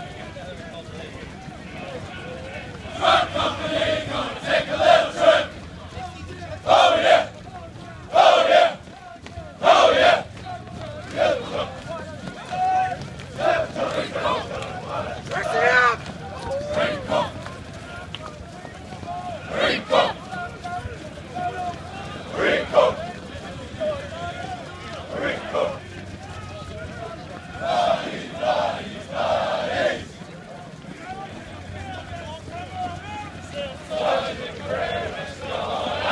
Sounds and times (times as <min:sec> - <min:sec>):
Crowd: 0:00.0 - 0:36.1
Run: 0:00.0 - 0:36.1
Speech: 0:00.0 - 0:36.1.